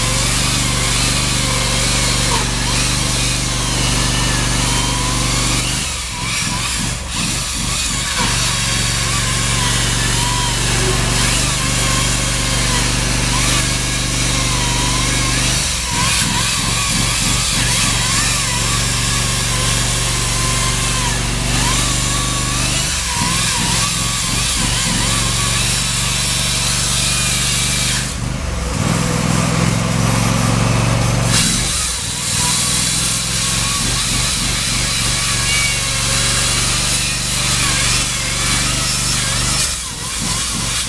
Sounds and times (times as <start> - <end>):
Light engine (high frequency): 0.0 - 40.8.